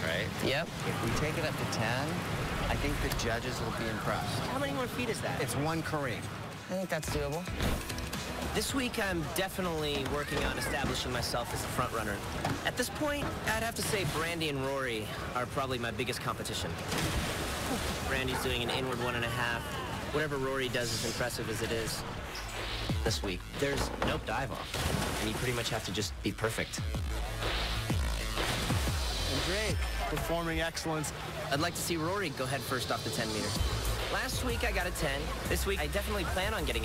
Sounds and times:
Water: 0.0 - 36.8
Music: 5.4 - 15.2, 19.6 - 36.8
Speech: 8.6 - 16.7, 23.0 - 24.6.

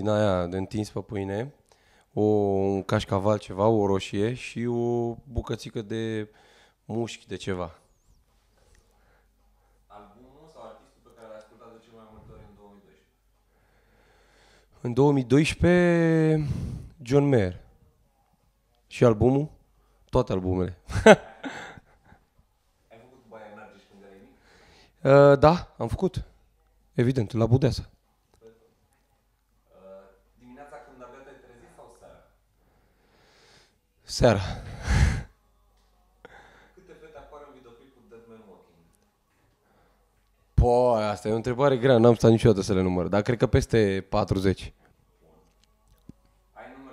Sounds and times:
Speech: 0.0 - 1.6, 2.2 - 6.3, 6.9 - 7.8, 9.9 - 13.1, 14.8 - 17.6, 18.9 - 20.8, 22.9 - 24.4, 25.0 - 26.3, 27.0 - 28.8, 29.7 - 32.4, 36.8 - 38.9, 40.6 - 45.5, 46.6 - 46.9.

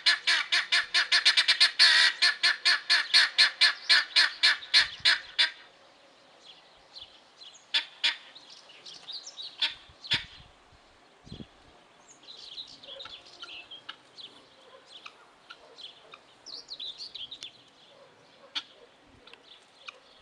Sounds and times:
Bird: 0.0 - 10.5, 11.3 - 20.2.

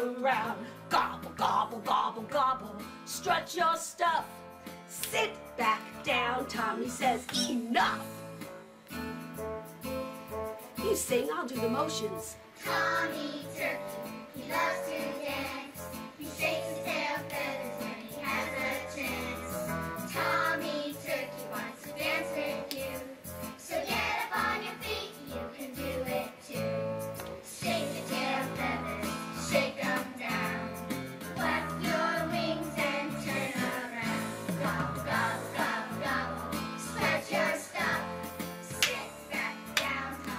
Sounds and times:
Music: 0.0 - 40.3
Speech: 10.8 - 12.4.

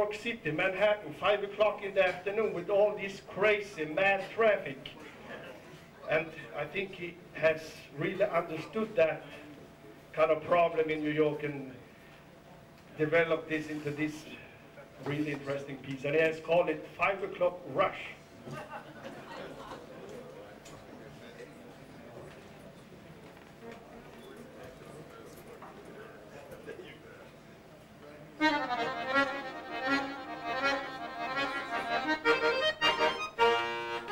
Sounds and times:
Speech: 0.0 - 11.8, 13.0 - 18.2, 23.6 - 28.4
Music: 28.4 - 34.1.

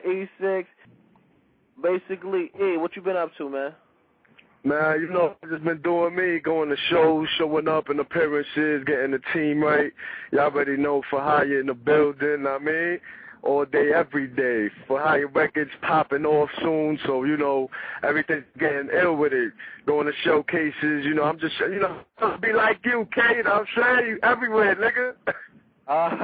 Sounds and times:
Speech: 0.0 - 0.8, 1.8 - 3.8, 4.6 - 26.2.

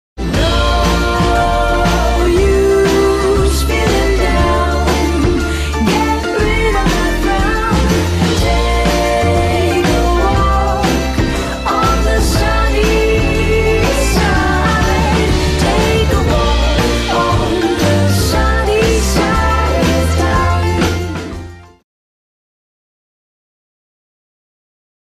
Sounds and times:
Music: 0.2 - 21.8.

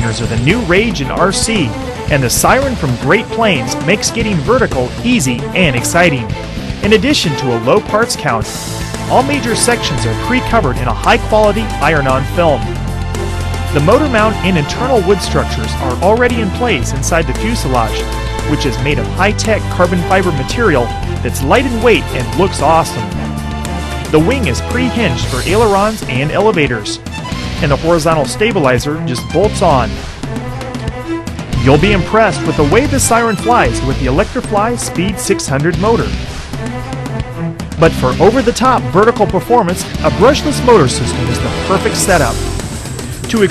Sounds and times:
Speech: 0.0 - 8.5, 9.1 - 12.7, 13.8 - 23.1, 24.1 - 27.0, 27.6 - 30.0, 31.6 - 36.2, 37.8 - 42.4, 43.3 - 43.5
Music: 0.0 - 43.5.

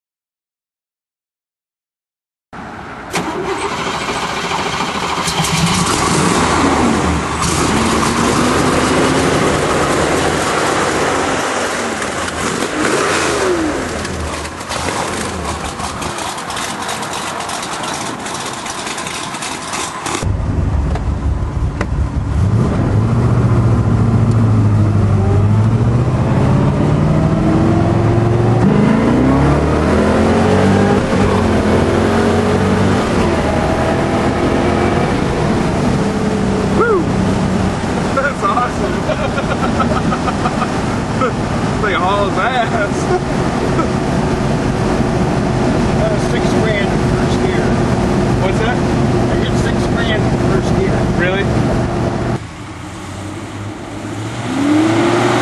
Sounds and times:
Speech: 38.2 - 39.2, 41.2 - 43.2, 46.0 - 47.8, 48.4 - 51.5.

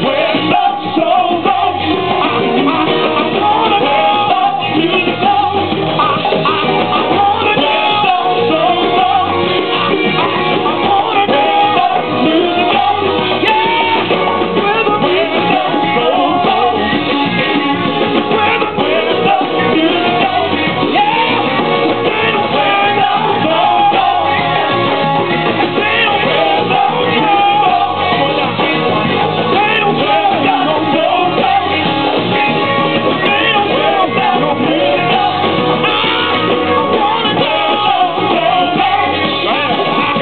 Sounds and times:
Music: 0.0 - 40.2.

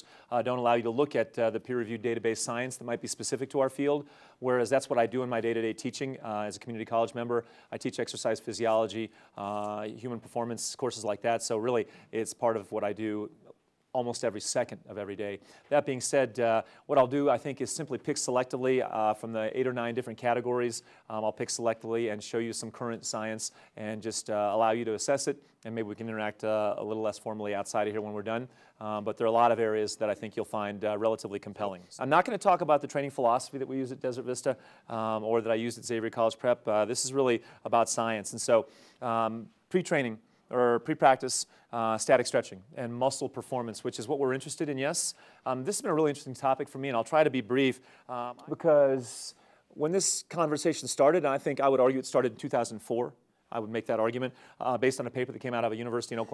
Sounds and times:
Speech: 0.0 - 56.3.

